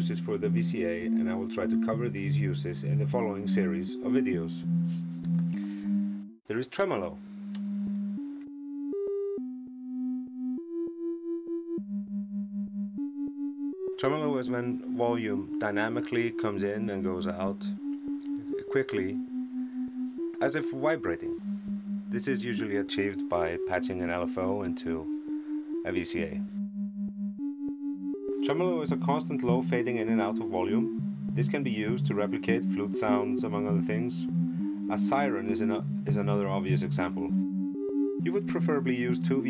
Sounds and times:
Speech: 0.0s - 4.6s, 6.5s - 7.2s, 14.0s - 17.7s, 18.6s - 19.2s, 20.4s - 21.4s, 22.2s - 25.1s, 25.9s - 26.4s, 28.4s - 34.2s, 34.9s - 37.3s, 38.2s - 39.5s
Synthesizer: 0.0s - 6.4s, 7.1s - 39.5s.

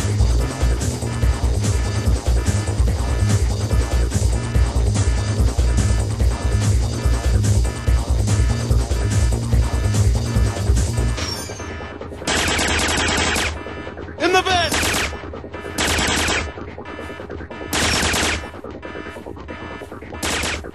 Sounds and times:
Sound effect: 9.7s - 20.7s.

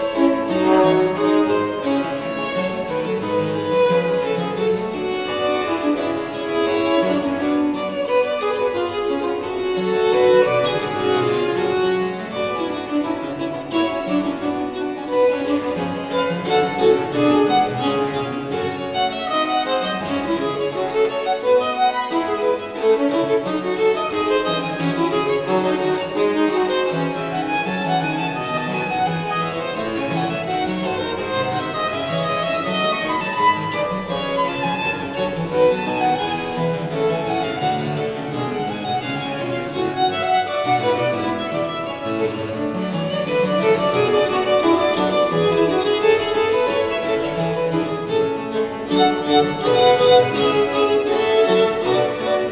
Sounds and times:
Violin, fiddle: 0.0s - 52.5s.

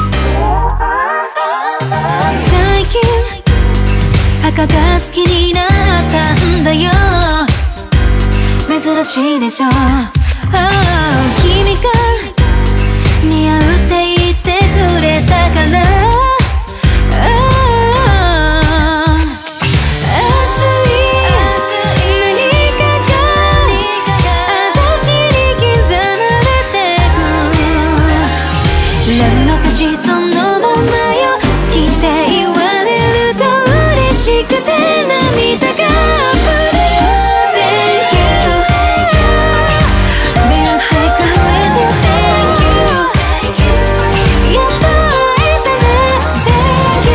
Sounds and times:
Soundtrack music: 0.0s - 13.9s, 14.7s - 47.1s.

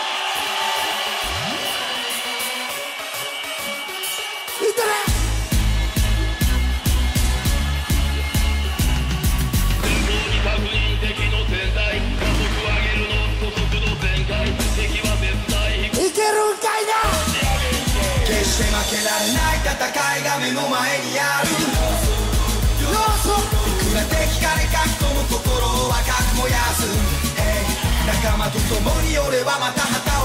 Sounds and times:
Music: 0.0s - 30.2s.

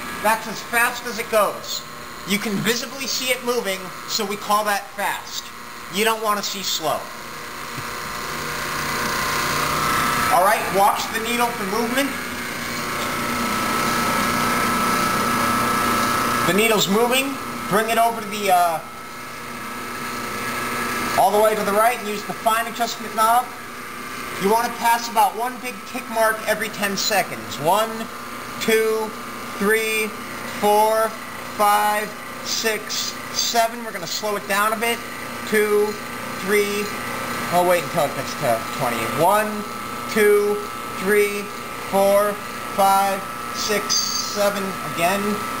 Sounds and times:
Speech: 0.2s - 7.1s, 10.3s - 12.2s, 16.5s - 18.9s, 21.2s - 23.6s, 24.4s - 45.5s.

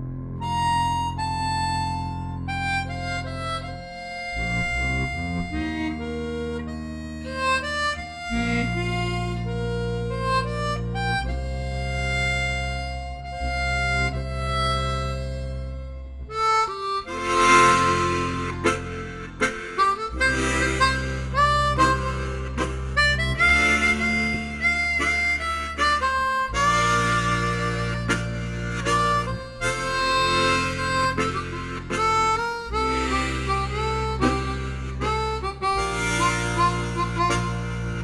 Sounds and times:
Harmonica: 0.0s - 38.0s.

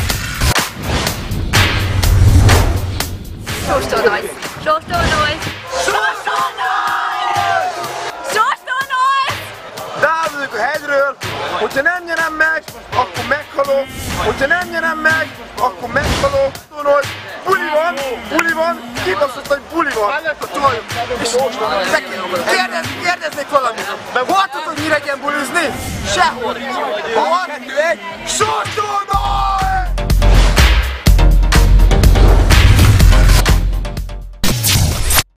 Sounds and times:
Music: 0.0s - 35.3s
Speech: 8.4s - 29.9s.

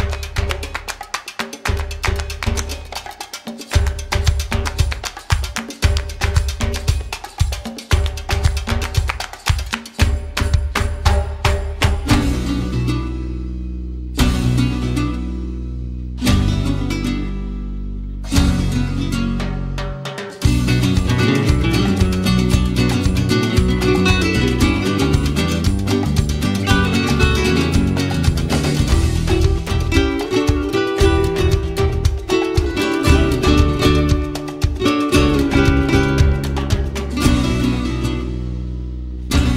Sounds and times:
Music: 0.0s - 39.5s.

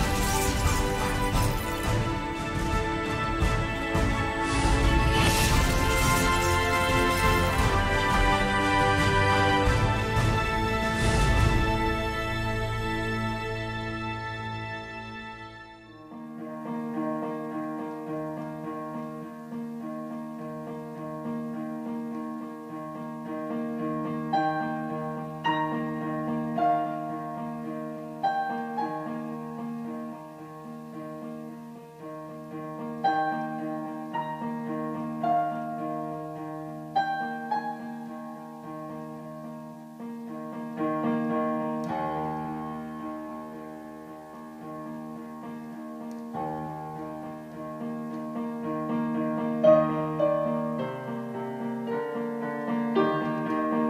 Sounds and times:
Music: 0.0s - 53.8s.

